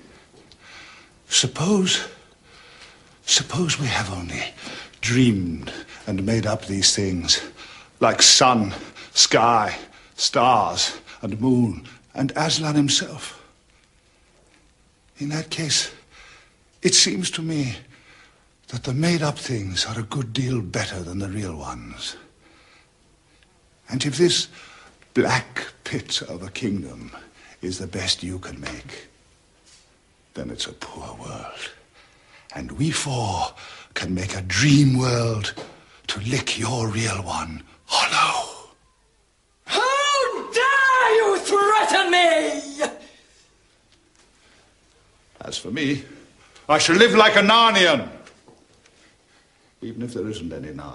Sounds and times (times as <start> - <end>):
Narration, monologue: 0.0 - 50.9
Male speech, man speaking: 1.3 - 2.2, 3.3 - 13.5, 15.2 - 16.0, 16.8 - 17.9, 18.7 - 22.2, 23.9 - 24.6, 25.2 - 29.1, 30.3 - 31.8, 32.5 - 38.7, 45.4 - 48.3, 49.8 - 50.9.